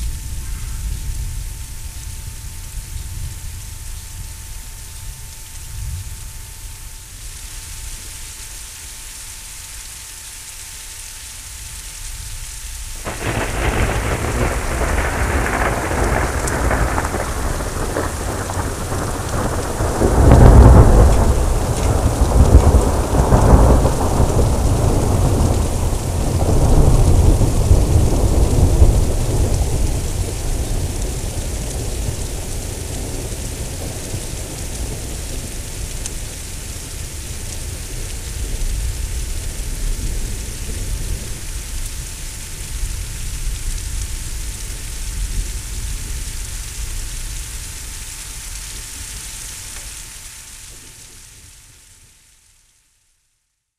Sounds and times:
Rain: 0.0 - 53.7.

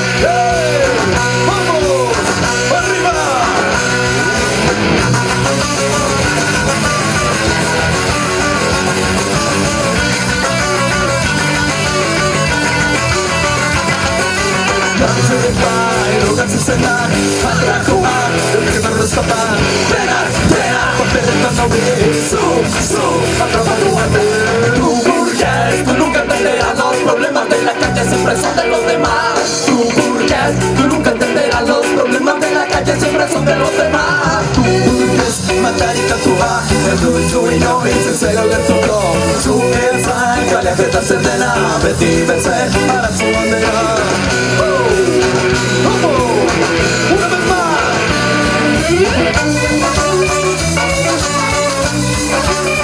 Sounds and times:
Rhythm and blues: 0.0 - 52.8.

